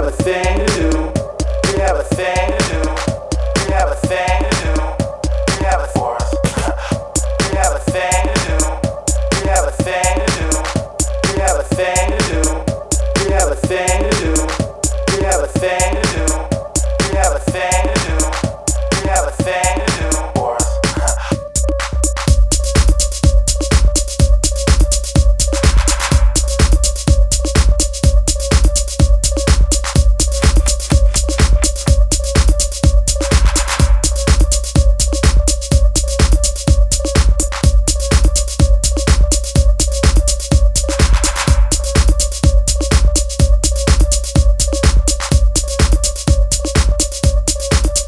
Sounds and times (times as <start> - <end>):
Music: 0.0 - 48.0.